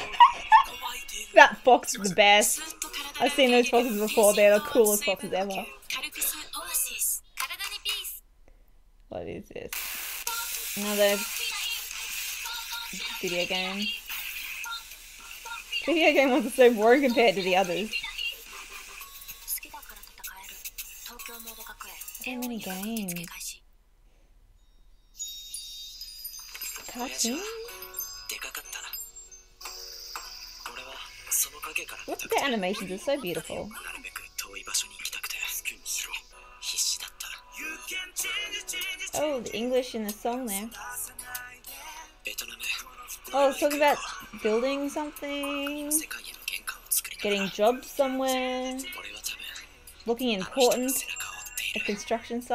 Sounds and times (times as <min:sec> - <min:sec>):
Music: 0:00.0 - 0:06.4, 0:10.2 - 0:23.1, 0:25.2 - 0:52.5
Inside, small room: 0:00.0 - 0:52.5
Speech: 0:03.2 - 0:08.2, 0:09.1 - 0:09.7, 0:10.8 - 0:11.3, 0:13.0 - 0:13.9, 0:22.2 - 0:23.6, 0:39.2 - 0:40.7, 0:43.4 - 0:46.2, 0:47.2 - 0:51.1.